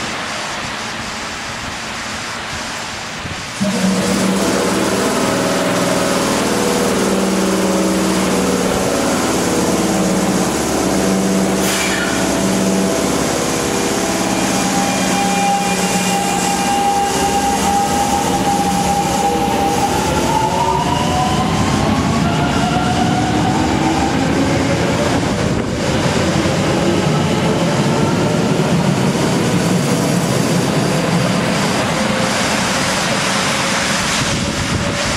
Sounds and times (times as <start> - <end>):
Railroad car, train wagon: 0.0 - 35.1
Train: 0.0 - 35.1.